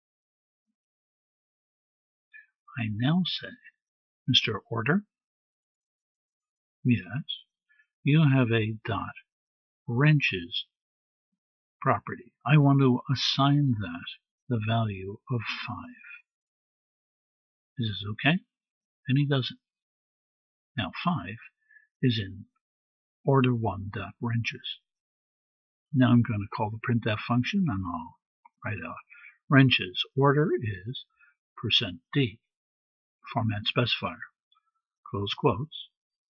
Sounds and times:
Speech: 2.4s - 5.2s, 6.8s - 7.5s, 8.1s - 9.3s, 9.9s - 10.8s, 11.8s - 16.3s, 17.8s - 19.7s, 20.8s - 22.6s, 23.3s - 24.9s, 26.0s - 32.5s, 33.3s - 34.4s, 35.1s - 36.0s.

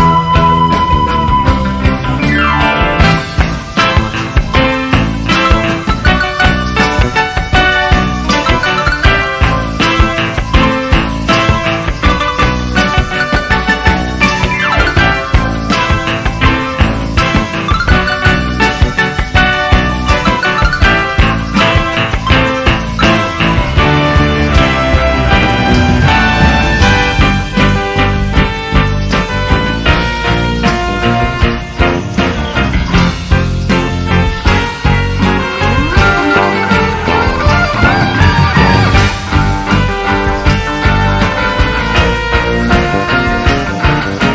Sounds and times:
Funk: 0.0s - 44.3s.

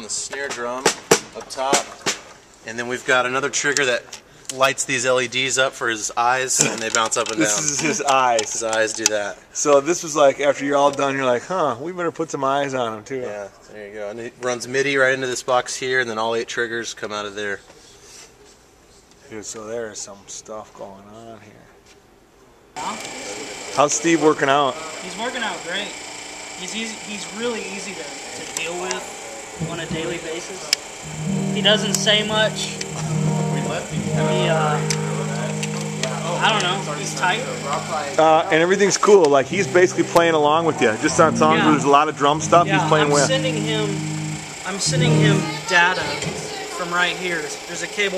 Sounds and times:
Speech: 0.0s - 2.0s, 2.6s - 18.0s, 19.2s - 21.8s, 22.8s - 26.0s, 26.6s - 30.8s, 31.6s - 44.0s, 44.7s - 48.1s.

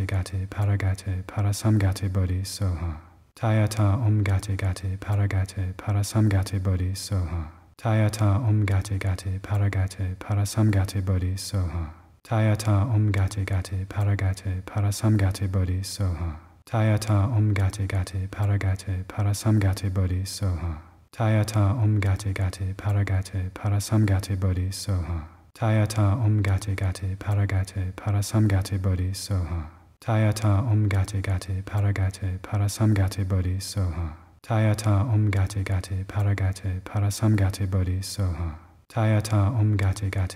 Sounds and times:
Mantra: 0.0s - 40.3s
Speech: 0.0s - 40.3s.

